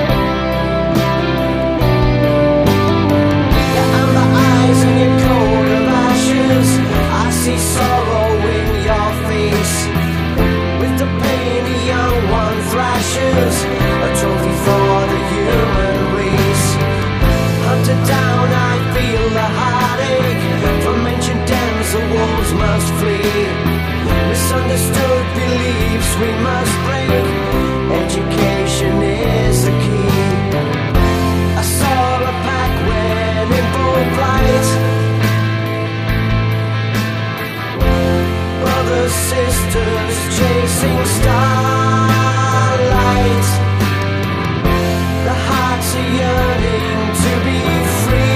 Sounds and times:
Music: 0:00.0 - 0:48.3.

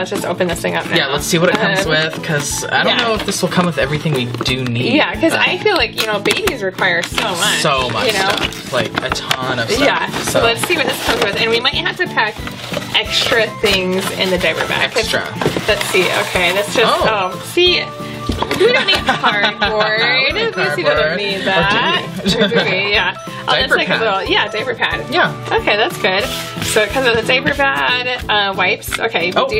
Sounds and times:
Music: 0:00.0 - 0:29.5.

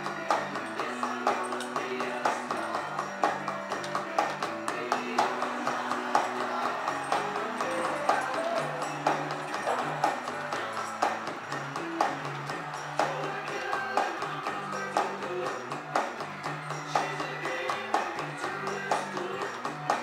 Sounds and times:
Drum: 0:00.0 - 0:20.0
Drum kit: 0:00.0 - 0:20.0.

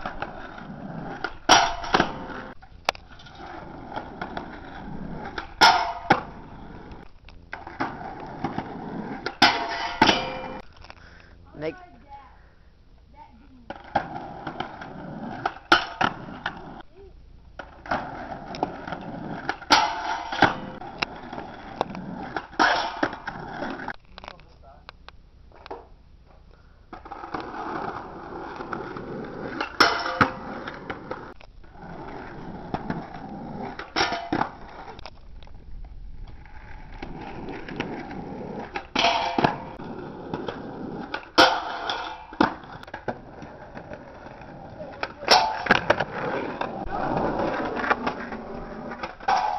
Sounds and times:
Speech: 0:24.3 - 0:24.9.

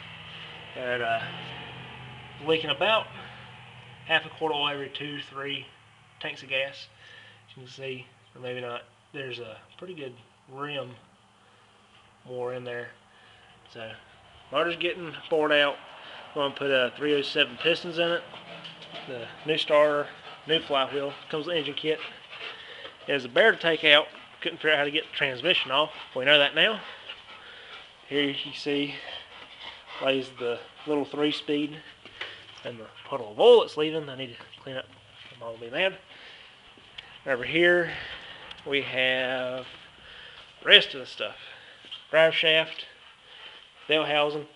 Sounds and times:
Speech: 0:00.8 - 0:01.3, 0:02.4 - 0:03.2, 0:04.1 - 0:06.9, 0:07.5 - 0:11.0, 0:12.2 - 0:13.0, 0:13.7 - 0:15.8, 0:16.4 - 0:18.3, 0:19.0 - 0:22.2, 0:23.1 - 0:26.9, 0:28.1 - 0:29.2, 0:30.0 - 0:31.9, 0:32.6 - 0:36.0, 0:37.2 - 0:39.8, 0:40.6 - 0:41.5, 0:42.1 - 0:43.0, 0:43.9 - 0:44.5.

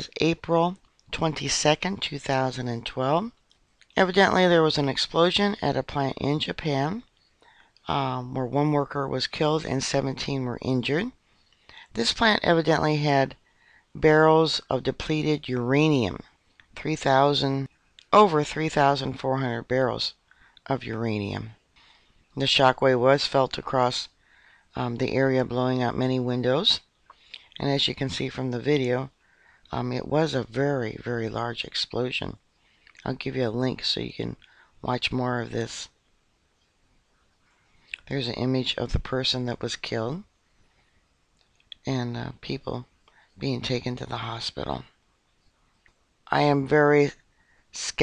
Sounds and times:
Speech: 0:00.0 - 0:07.1, 0:07.8 - 0:11.2, 0:11.8 - 0:13.4, 0:14.0 - 0:21.6, 0:22.4 - 0:24.1, 0:24.8 - 0:32.4, 0:33.0 - 0:36.0, 0:37.9 - 0:40.3, 0:41.7 - 0:44.9, 0:46.3 - 0:48.0.

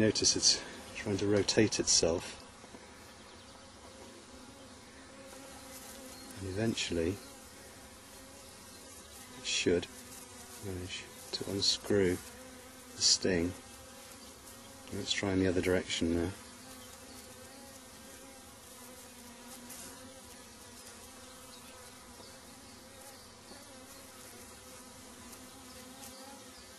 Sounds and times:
Speech: 0:00.0 - 0:02.4, 0:06.4 - 0:07.2, 0:09.4 - 0:10.0, 0:10.6 - 0:12.3, 0:13.0 - 0:13.6, 0:14.9 - 0:16.4
Bee, wasp, etc.: 0:00.0 - 0:26.7.

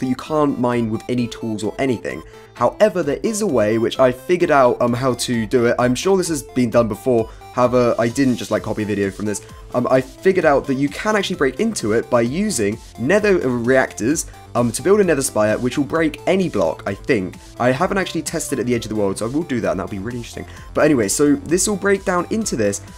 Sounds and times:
Speech: 0:00.0 - 0:22.8
Music: 0:00.0 - 0:22.9.

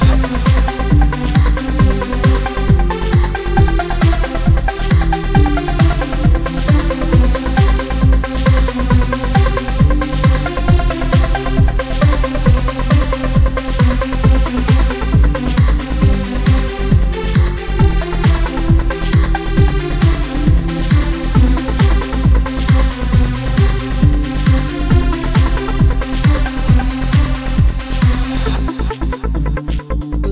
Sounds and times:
Trance music: 0:00.0 - 0:30.3.

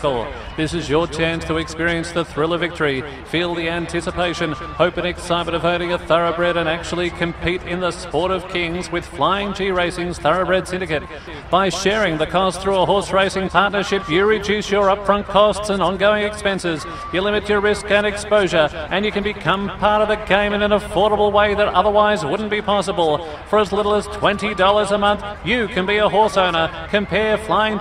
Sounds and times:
Speech: 0:00.0 - 0:27.8.

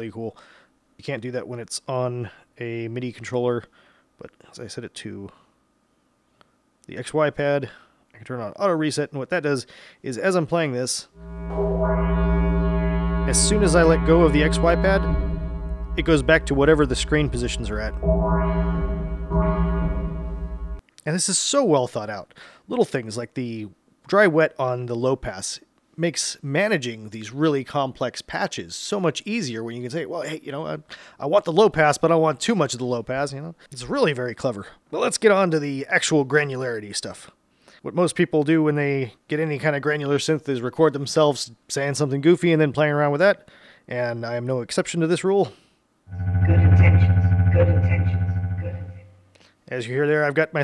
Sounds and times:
Synthesizer: 0:11.2 - 0:20.8, 0:46.1 - 0:49.2.

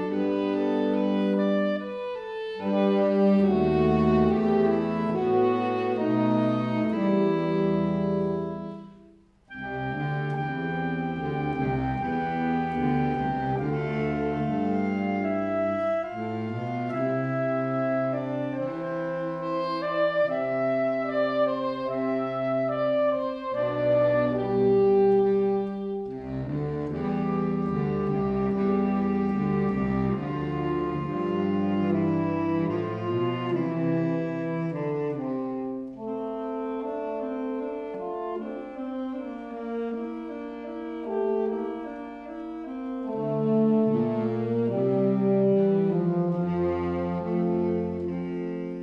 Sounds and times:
Brass instrument: 0:00.0 - 0:48.8
Saxophone: 0:00.0 - 0:48.8.

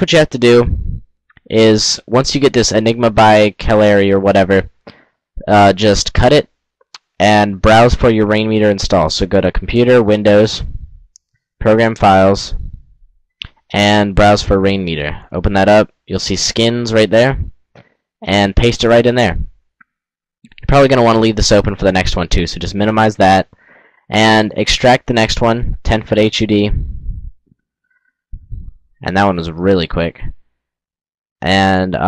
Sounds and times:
Speech: 0:00.0 - 0:04.8, 0:05.4 - 0:10.9, 0:11.6 - 0:12.8, 0:13.4 - 0:17.6, 0:18.2 - 0:19.5, 0:20.5 - 0:23.5, 0:24.1 - 0:27.0, 0:28.4 - 0:30.4, 0:31.4 - 0:32.0.

